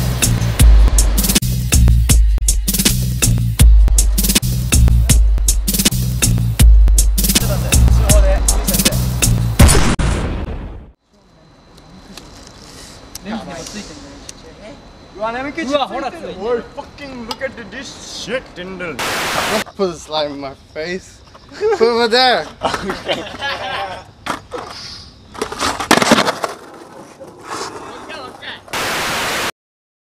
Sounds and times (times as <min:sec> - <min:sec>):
Skateboard: 0:24.3 - 0:28.7.